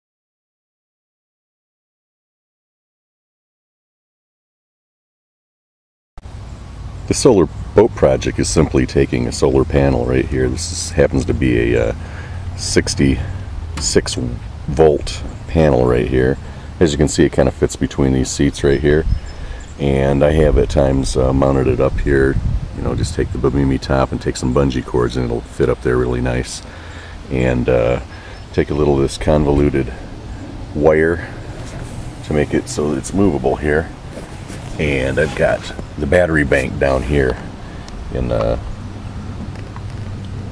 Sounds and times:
Speech: 0:07.1 - 0:12.0, 0:12.6 - 0:19.1, 0:19.8 - 0:26.7, 0:27.3 - 0:30.0, 0:30.8 - 0:31.4, 0:32.2 - 0:33.9, 0:34.8 - 0:37.5, 0:38.1 - 0:38.6.

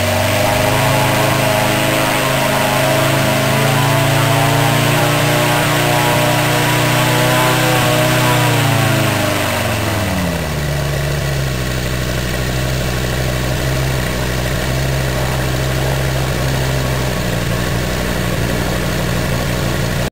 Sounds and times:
Engine: 0:00.0 - 0:20.1.

